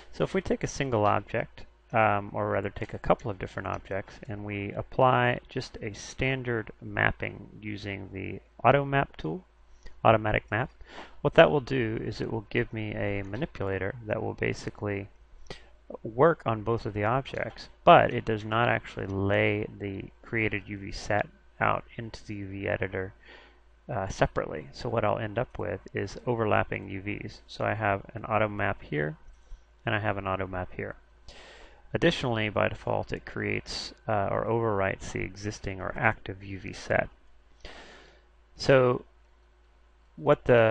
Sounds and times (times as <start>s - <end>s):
Speech: 0.0s - 15.1s, 15.9s - 23.2s, 23.9s - 29.2s, 29.9s - 31.0s, 31.9s - 37.2s, 38.6s - 39.1s, 40.2s - 40.7s.